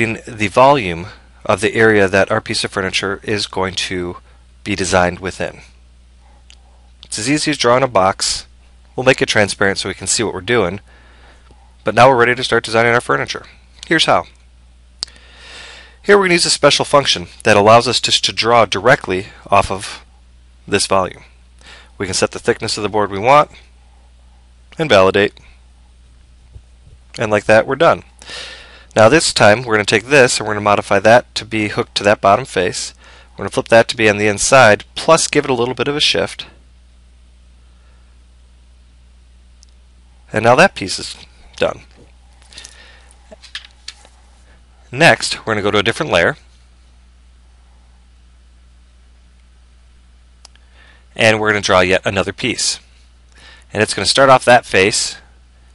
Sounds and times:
Speech: 0.0 - 5.8, 7.0 - 10.8, 11.8 - 14.4, 16.0 - 20.1, 20.7 - 21.3, 22.0 - 23.7, 24.8 - 25.5, 27.2 - 28.1, 29.0 - 36.6, 40.3 - 42.0, 44.9 - 46.5, 51.2 - 52.9, 53.7 - 55.3.

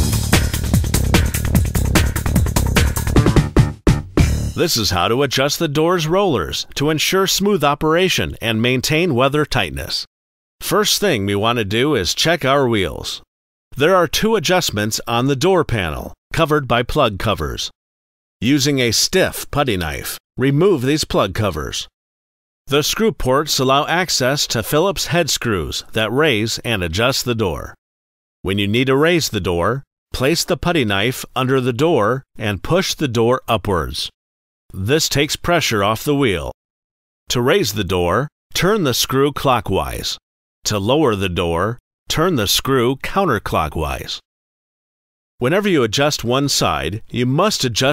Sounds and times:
Speech: 4.6 - 17.8, 18.4 - 22.0, 22.7 - 27.8, 28.5 - 36.6, 37.3 - 44.3, 45.4 - 47.9.

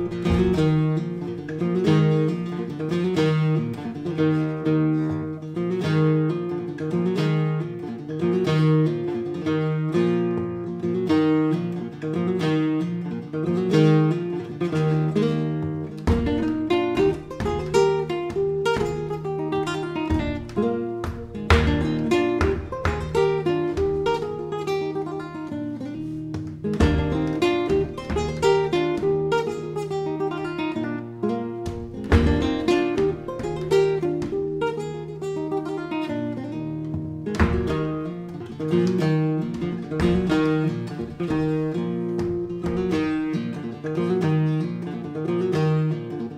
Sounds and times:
Strum: 0.0 - 46.3.

